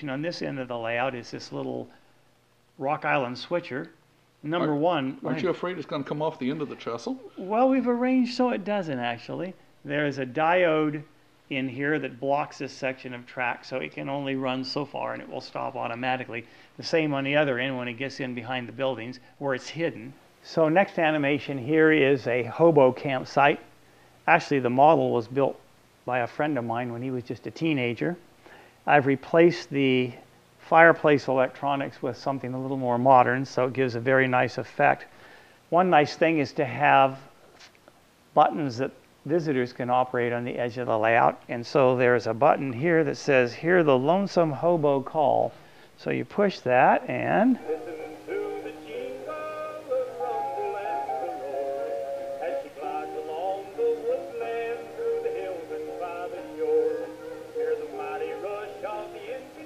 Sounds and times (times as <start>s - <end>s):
Speech: 0.0s - 2.0s, 2.8s - 23.7s, 24.3s - 28.2s, 28.9s - 35.1s, 35.7s - 37.3s, 38.4s - 47.6s
Music: 47.6s - 59.6s.